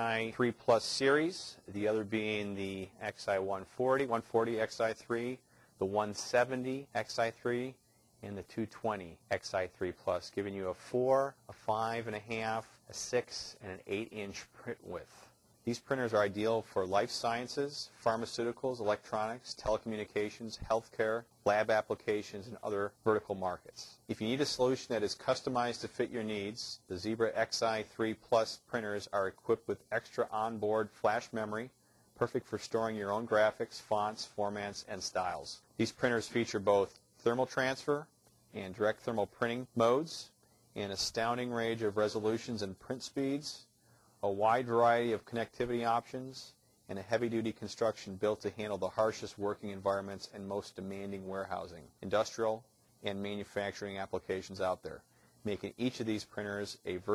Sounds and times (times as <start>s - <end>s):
Speech: 0.0s - 57.1s.